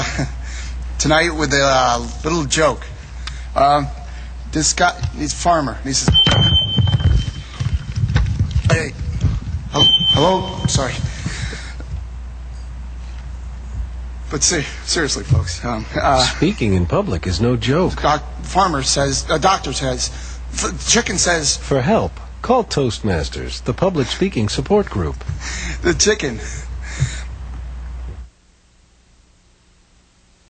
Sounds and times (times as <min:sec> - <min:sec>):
Narration, monologue: 0:00.0 - 0:28.5
Male speech, man speaking: 0:01.0 - 0:02.9, 0:03.6 - 0:06.2, 0:08.7 - 0:09.0, 0:09.8 - 0:11.1, 0:14.3 - 0:25.2, 0:25.8 - 0:26.5.